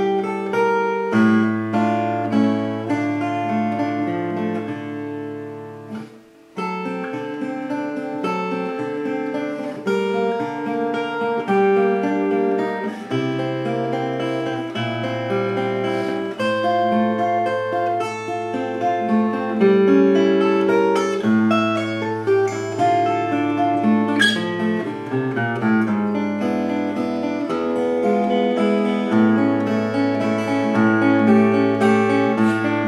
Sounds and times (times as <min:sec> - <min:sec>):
Acoustic guitar: 0:00.0 - 0:32.8
Strum: 0:00.0 - 0:32.8.